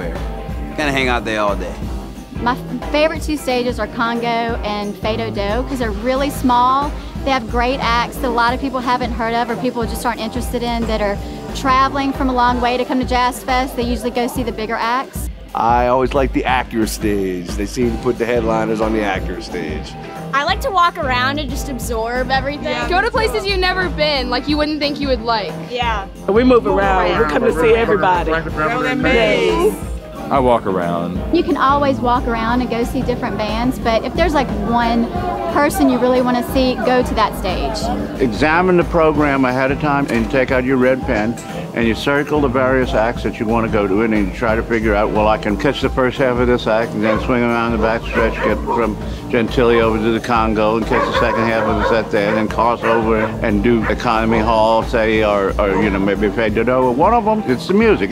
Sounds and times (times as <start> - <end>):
Blues: 0.0 - 58.1
Jazz: 0.0 - 58.1
Rhythm and blues: 0.0 - 58.1.